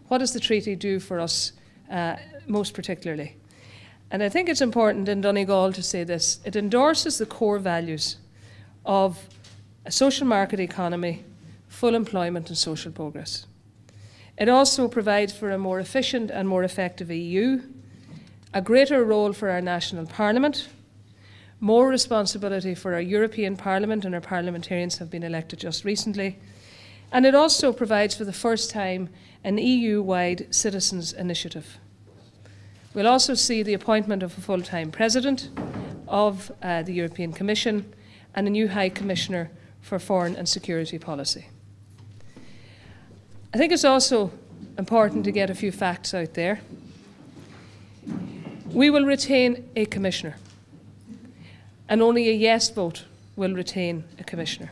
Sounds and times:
Female speech, woman speaking: 0.0s - 3.4s, 4.1s - 8.2s, 8.9s - 9.3s, 9.9s - 13.5s, 14.4s - 17.8s, 18.5s - 20.8s, 21.6s - 26.4s, 27.1s - 31.8s, 33.0s - 41.5s, 43.6s - 46.7s, 48.7s - 50.5s, 51.9s - 54.7s
Narration, monologue: 0.0s - 54.7s.

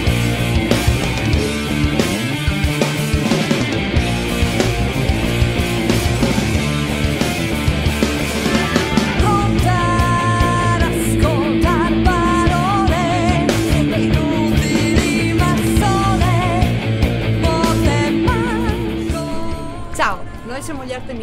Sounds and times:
Funk: 0.0s - 19.6s.

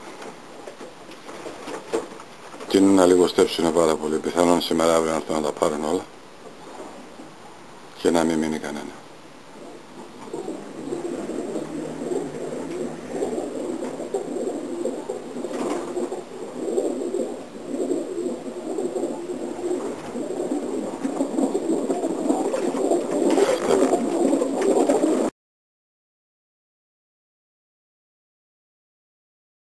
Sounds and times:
Pigeon, dove: 10.1s - 25.3s.

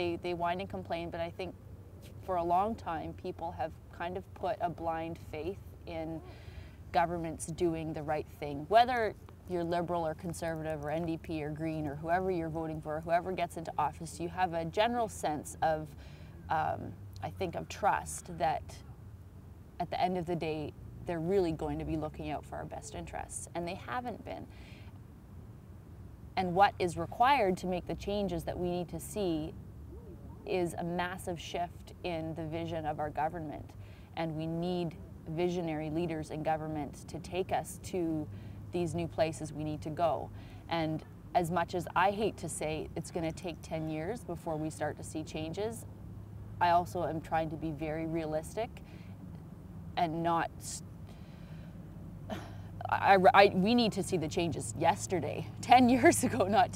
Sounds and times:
Speech: 0.0s - 6.2s, 6.9s - 15.9s, 16.5s - 18.8s, 19.8s - 24.5s, 26.4s - 29.6s, 30.5s - 45.8s, 46.6s - 48.8s, 50.0s - 50.8s, 52.8s - 56.7s.

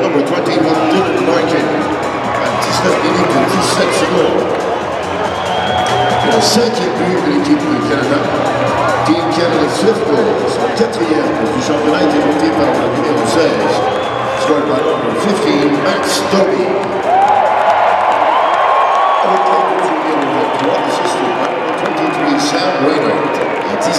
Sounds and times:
Speech: 0.0s - 4.5s, 6.2s - 16.8s, 19.2s - 23.9s
Crowd: 0.0s - 23.9s.

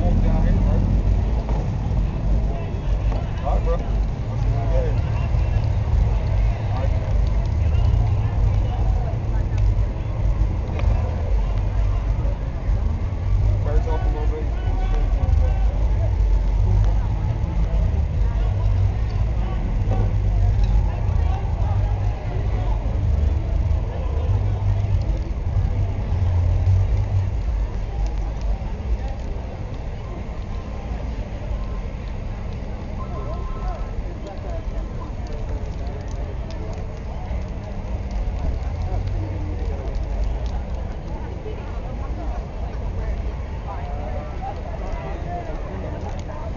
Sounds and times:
Speech: 0.0s - 46.5s.

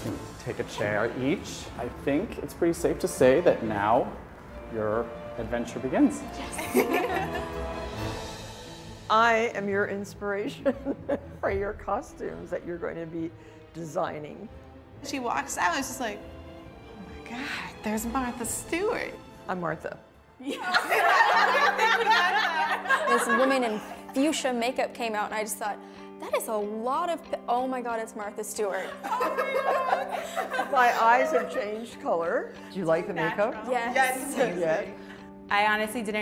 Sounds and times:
Female speech, woman speaking: 9.1s - 10.7s, 23.0s - 30.0s, 30.6s - 32.5s, 33.1s - 34.9s, 35.5s - 36.2s.

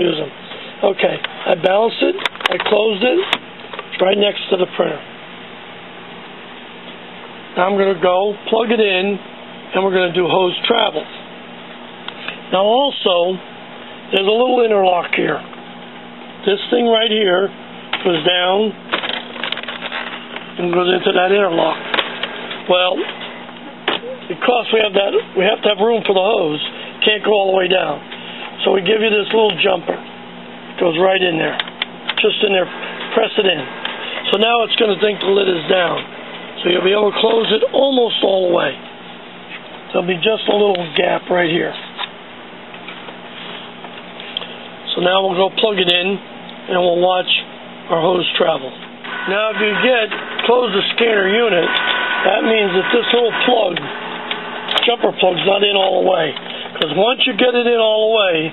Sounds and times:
Speech: 0.0s - 5.1s, 7.6s - 11.2s, 12.5s - 13.5s, 14.1s - 15.5s, 16.4s - 18.8s, 20.6s - 21.8s, 22.7s - 23.1s, 24.0s - 30.1s, 30.8s - 31.6s, 32.2s - 38.8s, 39.9s - 42.0s, 44.9s - 54.0s, 54.8s - 58.5s.

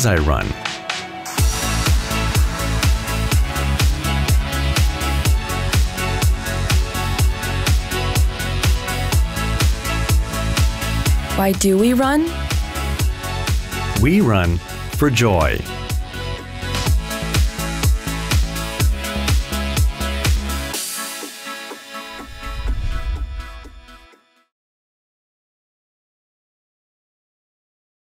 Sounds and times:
Speech: 0.0s - 0.6s, 11.4s - 12.3s, 14.0s - 15.7s
Music: 0.0s - 24.6s.

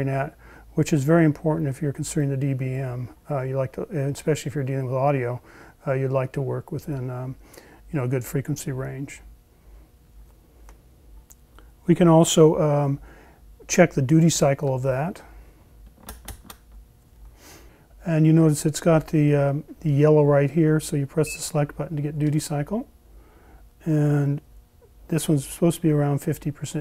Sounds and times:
Speech: 0.0s - 9.3s, 11.9s - 13.0s, 13.6s - 15.3s, 18.0s - 22.9s, 23.8s - 24.5s, 25.1s - 26.8s
Inside, small room: 0.0s - 26.8s.

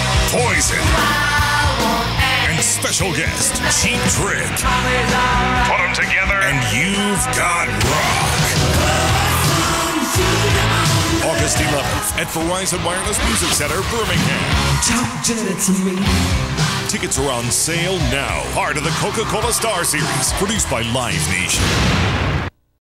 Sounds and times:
Music: 0.0s - 22.5s
Speech: 0.3s - 1.0s, 2.4s - 4.6s, 5.6s - 8.5s, 11.2s - 16.0s, 16.9s - 21.6s.

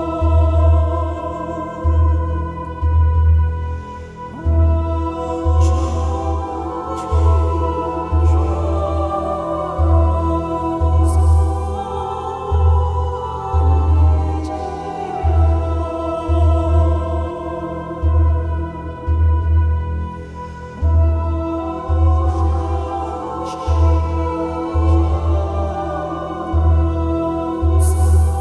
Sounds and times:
Mantra: 0.0s - 28.4s.

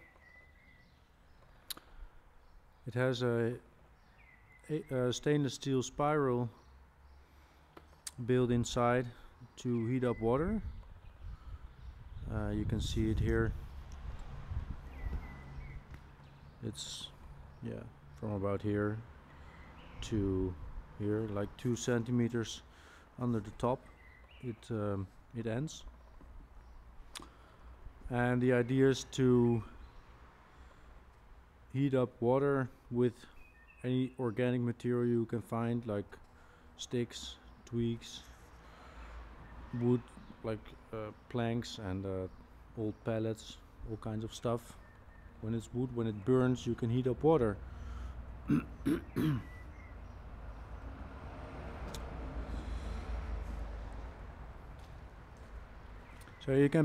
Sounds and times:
Speech: 2.9s - 3.7s, 4.6s - 6.6s, 8.1s - 10.7s, 12.2s - 13.6s, 16.6s - 19.1s, 20.0s - 23.8s, 24.4s - 25.9s, 28.1s - 29.8s, 31.7s - 36.2s, 36.8s - 38.3s, 39.7s - 44.8s, 45.4s - 47.6s, 56.4s - 56.8s.

